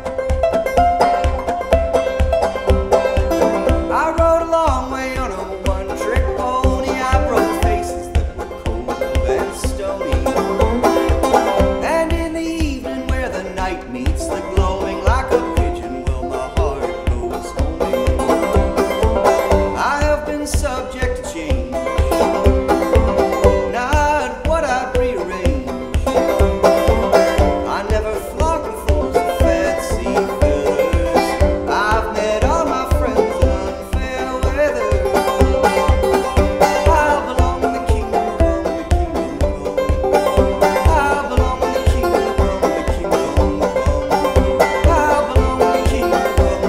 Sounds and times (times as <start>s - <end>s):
Banjo: 0.0s - 46.6s.